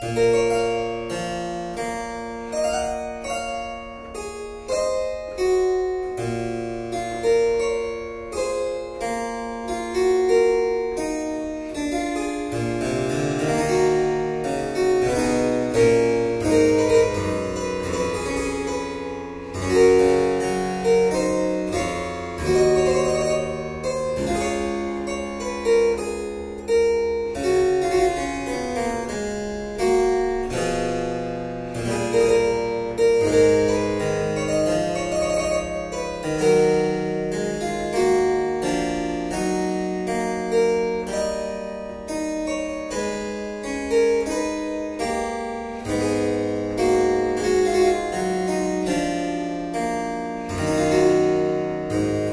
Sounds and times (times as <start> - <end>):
Harpsichord: 0.0 - 52.3.